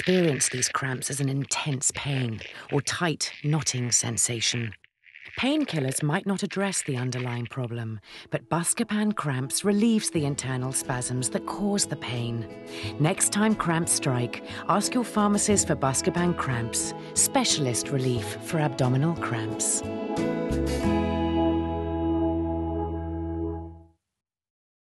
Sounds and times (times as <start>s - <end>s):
Speech: 0.0s - 4.8s, 5.4s - 19.8s
Music: 8.1s - 24.0s.